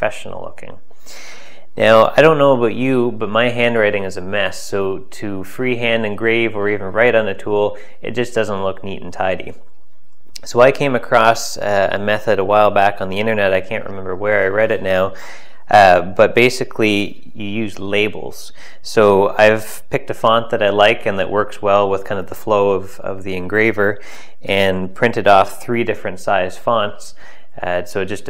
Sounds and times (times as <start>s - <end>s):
Speech: 0.0s - 0.8s, 1.8s - 9.6s, 10.4s - 28.2s.